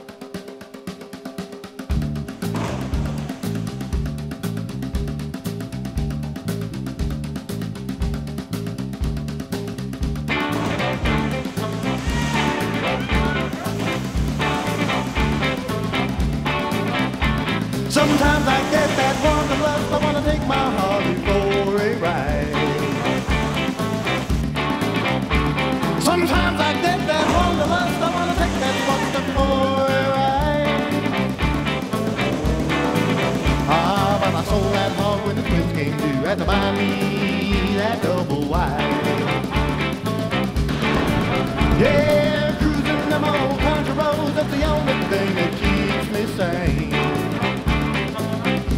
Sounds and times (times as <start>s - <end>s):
Funny music: 0.0s - 48.7s.